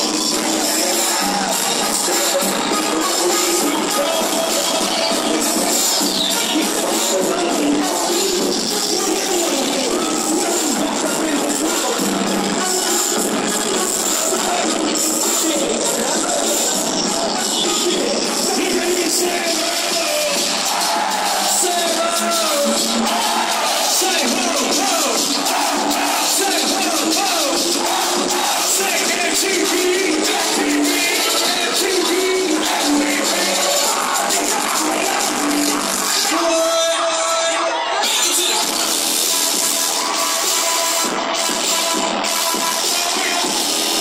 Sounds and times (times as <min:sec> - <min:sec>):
Exciting music: 0:00.0 - 0:37.0.